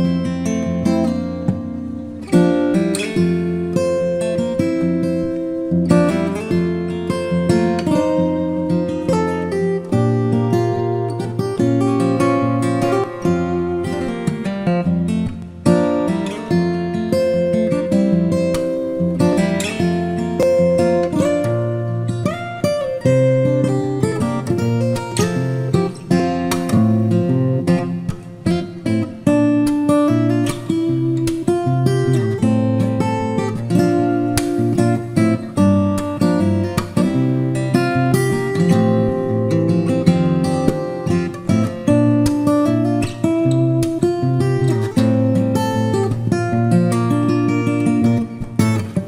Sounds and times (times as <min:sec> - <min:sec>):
Strum: 0:00.0 - 0:49.0.